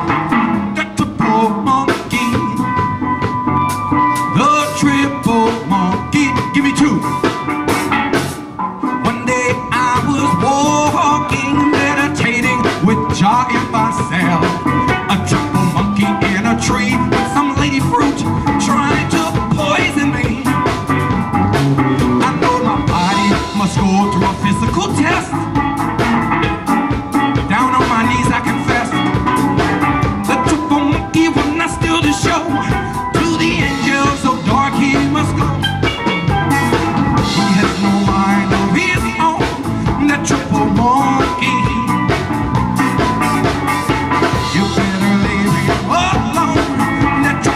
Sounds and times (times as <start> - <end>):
Bass drum: 0.0 - 47.5
Drum kit: 0.0 - 47.5.